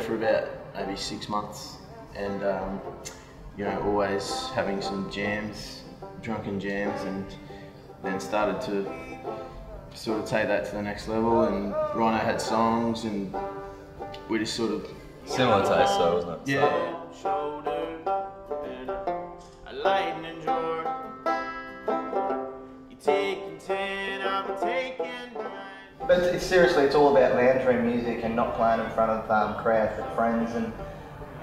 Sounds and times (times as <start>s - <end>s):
Speech: 0.0s - 2.9s, 3.6s - 7.4s, 10.0s - 13.3s, 26.1s - 30.8s
Music: 0.0s - 31.4s.